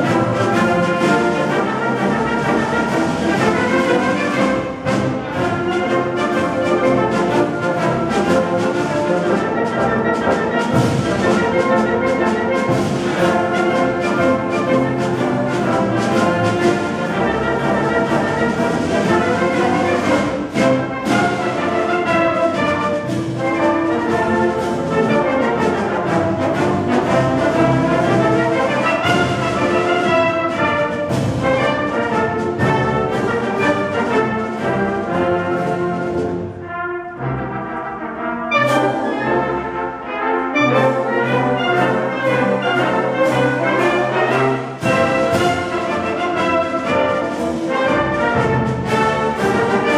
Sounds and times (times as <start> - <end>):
Music: 0.0 - 49.9.